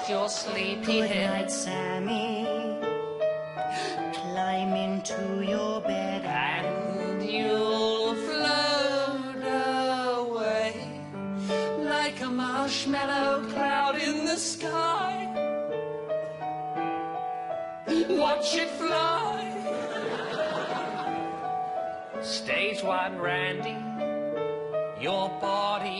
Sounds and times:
Lullaby: 0:03.7 - 0:15.4.

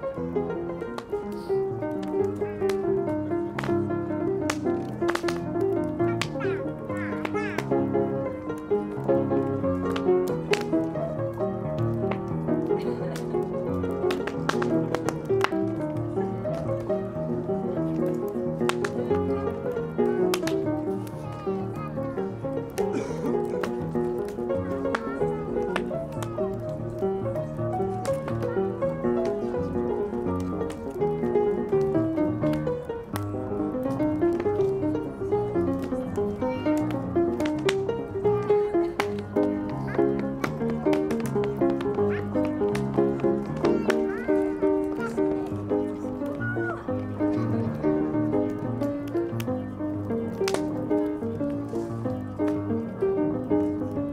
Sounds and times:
Fire: 0:00.0 - 0:54.1
Piano: 0:00.0 - 0:54.1.

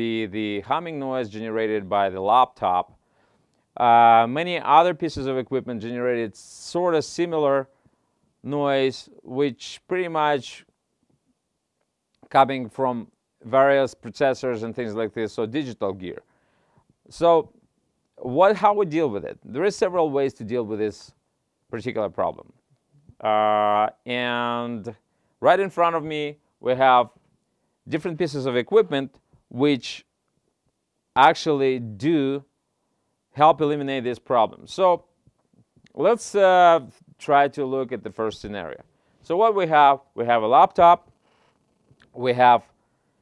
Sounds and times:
Speech: 0:00.0 - 0:03.0, 0:03.8 - 0:07.7, 0:08.4 - 0:10.7, 0:12.2 - 0:16.3, 0:17.1 - 0:17.6, 0:18.2 - 0:27.2, 0:27.8 - 0:30.1, 0:31.2 - 0:32.5, 0:33.3 - 0:35.1, 0:35.9 - 0:41.1, 0:42.0 - 0:42.8.

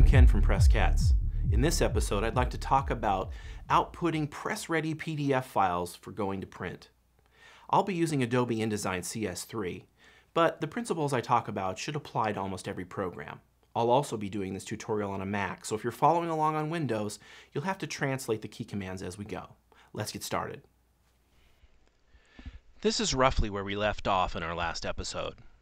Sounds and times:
Speech: 0:00.0 - 0:07.0, 0:07.7 - 0:20.7, 0:22.8 - 0:25.5.

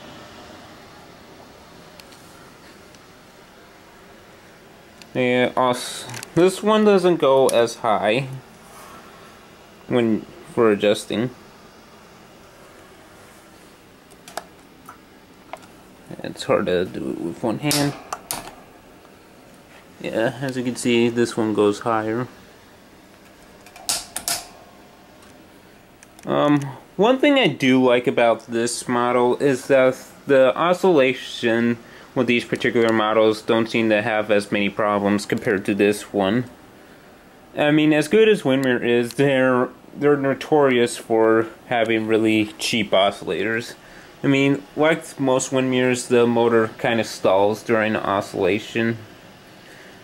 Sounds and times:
Speech: 0:05.1 - 0:08.5, 0:09.9 - 0:11.4, 0:16.1 - 0:18.1, 0:20.0 - 0:22.4, 0:26.2 - 0:36.5, 0:37.6 - 0:49.1.

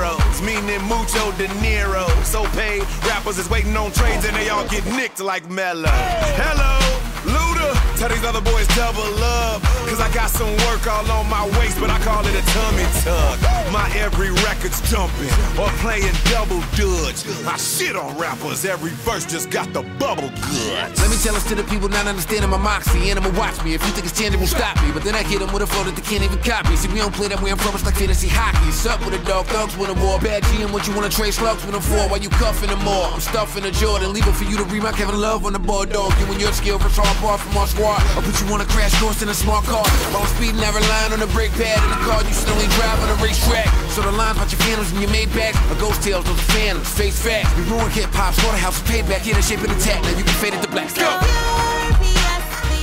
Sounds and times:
Pop music: 0:00.0 - 0:52.8.

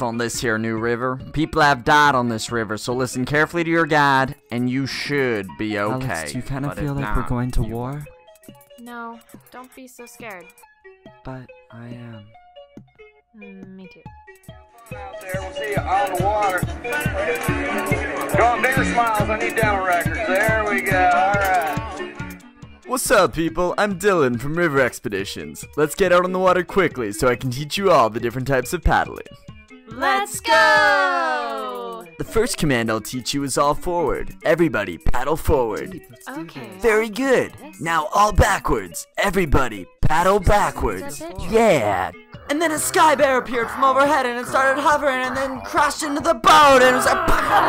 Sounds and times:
Speech: 0:00.0 - 0:08.1, 0:29.9 - 0:47.6
Music: 0:00.0 - 0:47.6.

